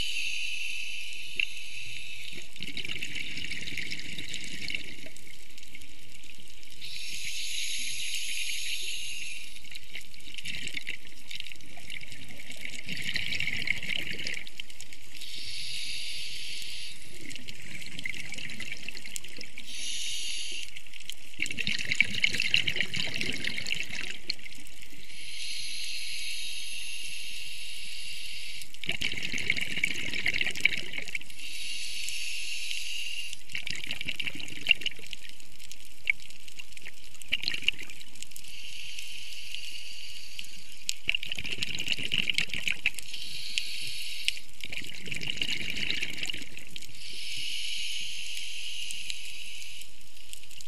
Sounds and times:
Stream: 0:00.0 - 0:50.6.

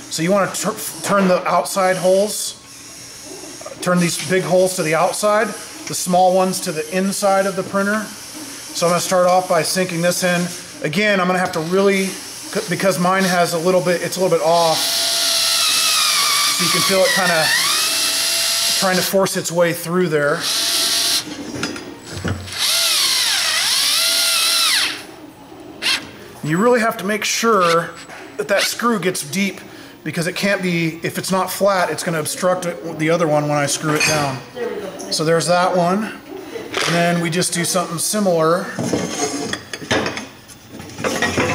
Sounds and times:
Drill: 0:14.6 - 0:19.1, 0:20.4 - 0:21.3, 0:22.5 - 0:25.0, 0:25.8 - 0:26.0.

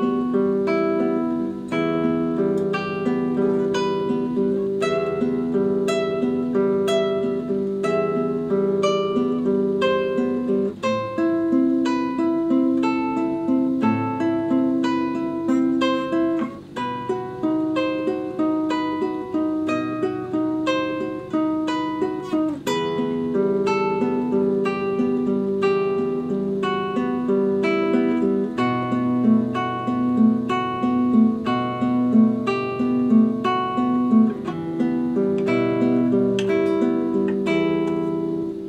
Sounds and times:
Acoustic guitar: 0:00.0 - 0:38.6
Strum: 0:00.0 - 0:38.6.

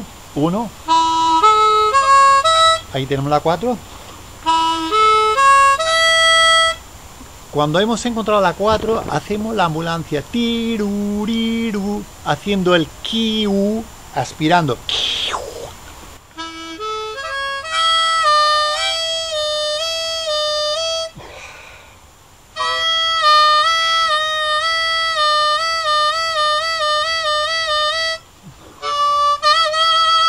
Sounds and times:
Male speech, man speaking: 0:00.0 - 0:00.8, 0:02.9 - 0:03.8, 0:07.5 - 0:10.9, 0:11.7 - 0:15.8
Harmonica: 0:00.8 - 0:06.9, 0:16.3 - 0:21.5, 0:22.6 - 0:30.2.

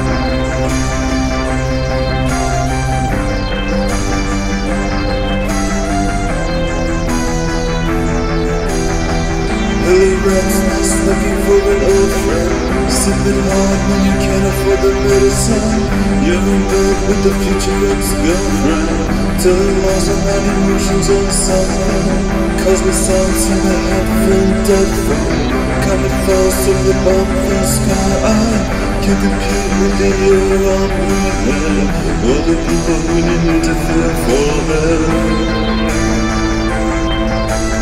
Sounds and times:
Music: 0:00.0 - 0:37.8.

